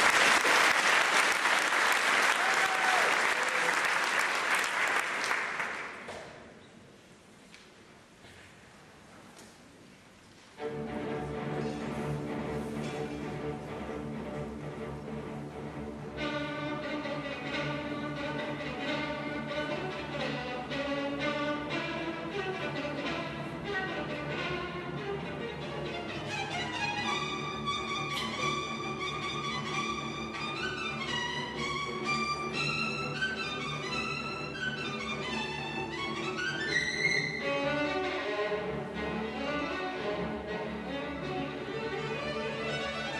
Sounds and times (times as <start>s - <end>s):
Violin, fiddle: 10.6s - 43.1s.